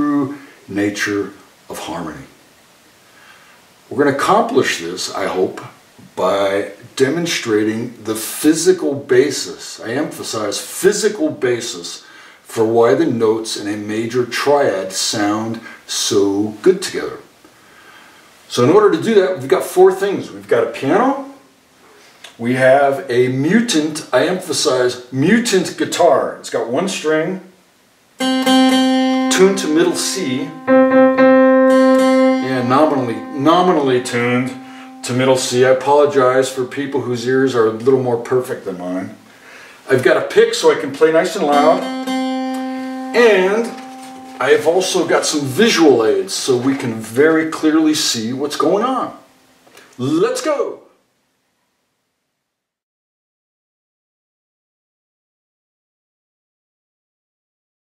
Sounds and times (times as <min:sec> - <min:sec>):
Speech: 0:00.0 - 0:02.4, 0:03.9 - 0:17.3, 0:18.5 - 0:21.5, 0:22.3 - 0:27.6, 0:29.3 - 0:30.6, 0:32.4 - 0:39.2, 0:39.9 - 0:41.8, 0:43.2 - 0:43.8, 0:44.4 - 0:49.3, 0:50.0 - 0:50.9.